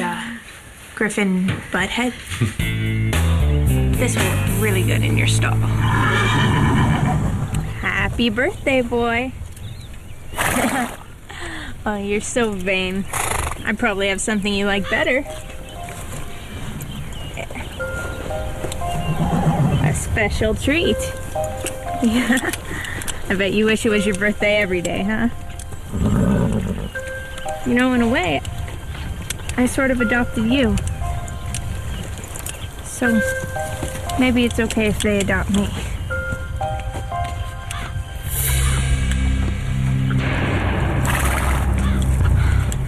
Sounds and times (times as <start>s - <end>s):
Outside, rural or natural: 0.0s - 42.8s
Speech: 1.0s - 2.2s, 4.0s - 5.7s, 7.8s - 9.4s, 11.8s - 13.0s, 13.6s - 15.3s, 19.8s - 21.2s, 23.3s - 25.3s, 27.7s - 28.4s, 29.6s - 30.8s, 32.9s - 33.3s, 34.1s - 35.8s
Music: 2.4s - 6.6s, 14.5s - 17.1s, 17.7s - 25.9s, 26.9s - 42.8s.